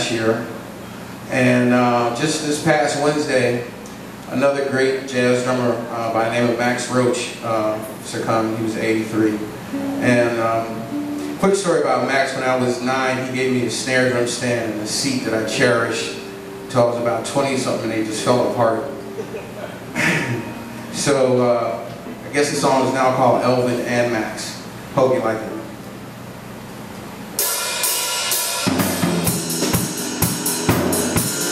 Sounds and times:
Speech: 0.0s - 0.6s, 1.3s - 20.1s, 21.0s - 25.8s.

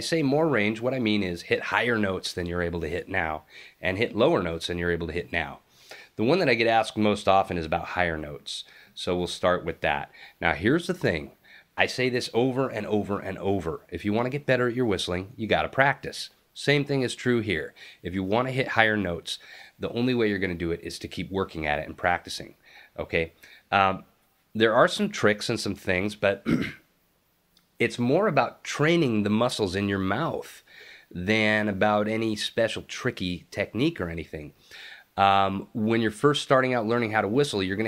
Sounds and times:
Speech: 0.0s - 5.6s, 6.2s - 26.6s, 27.8s - 34.5s, 35.2s - 37.8s.

